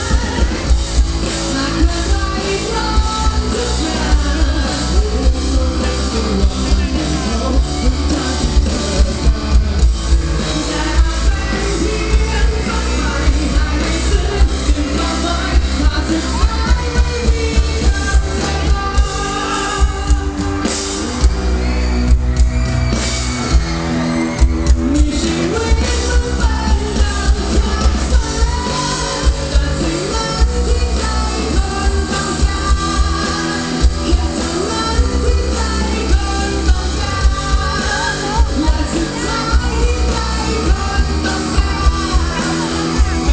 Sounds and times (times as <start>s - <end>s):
Music: 0.0s - 43.3s.